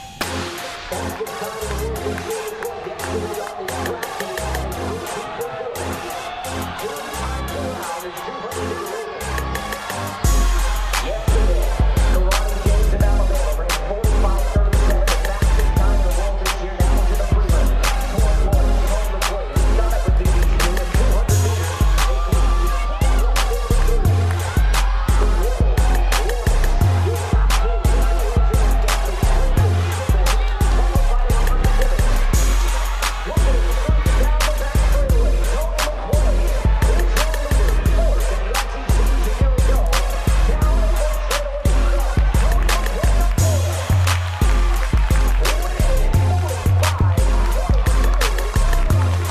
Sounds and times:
Music: 0.0 - 49.3
Speech: 0.2 - 49.3.

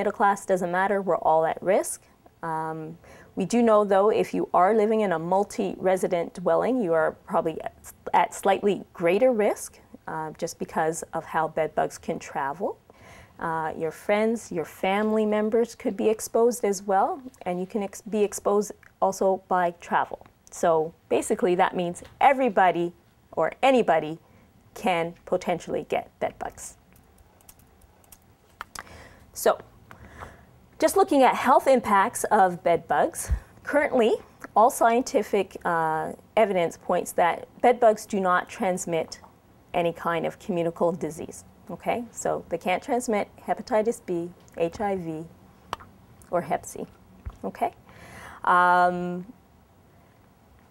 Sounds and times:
Speech: 0.0 - 12.8, 13.4 - 24.2, 24.8 - 26.8, 29.4 - 29.6, 30.8 - 39.2, 39.8 - 45.3, 46.3 - 47.8, 48.5 - 49.3.

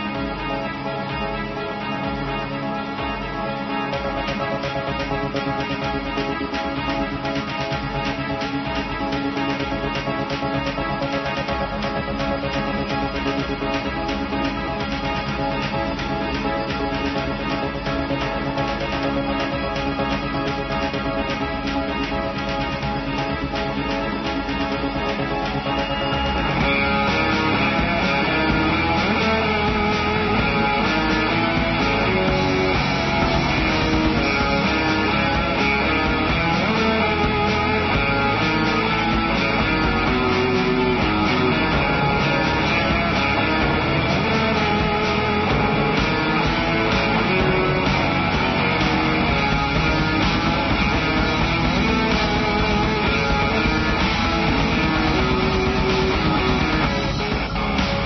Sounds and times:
Theme music: 0.0 - 58.0.

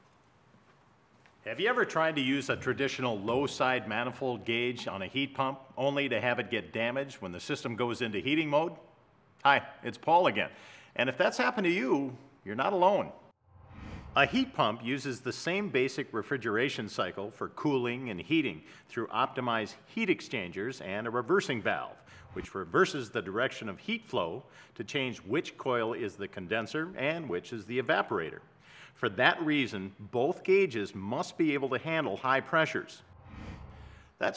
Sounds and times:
Speech: 1.4 - 13.3, 14.2 - 33.1.

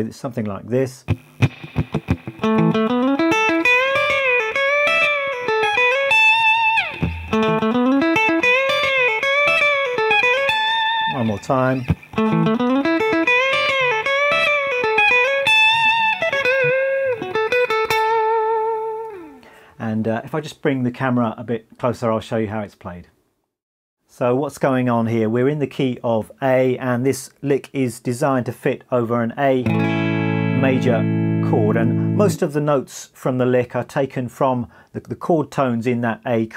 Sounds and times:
Speech: 0.0 - 1.1, 11.1 - 11.9, 19.8 - 23.2, 24.1 - 29.7, 30.6 - 36.5
Guitar: 0.4 - 19.7, 29.5 - 32.9.

